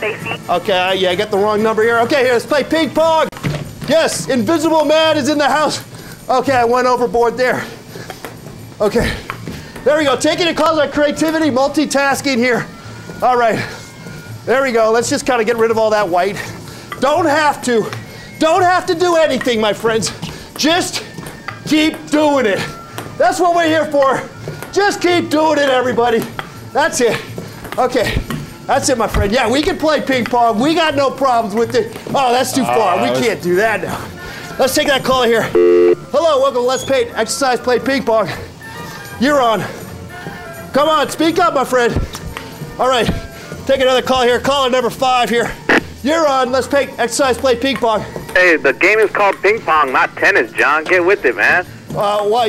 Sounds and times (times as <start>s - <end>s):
Music: 0.0s - 52.4s.